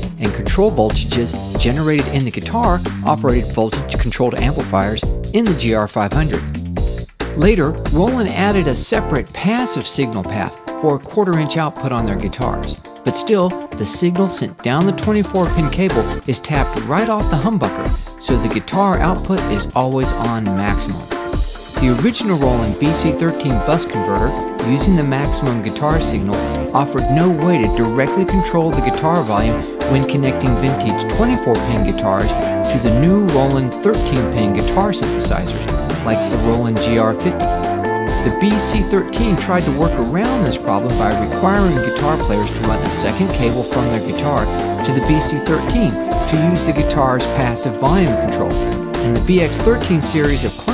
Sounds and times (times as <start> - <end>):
Speech: 0.1 - 6.5, 7.4 - 21.1, 21.8 - 37.6, 38.2 - 50.7
Guitar: 10.0 - 50.7.